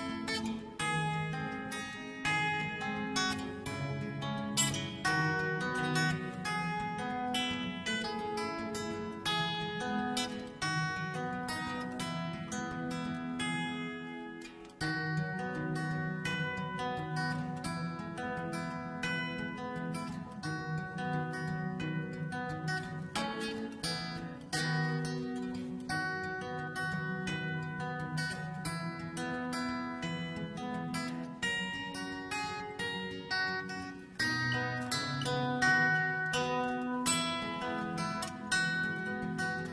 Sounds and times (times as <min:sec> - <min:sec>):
Country: 0:00.0 - 0:39.7.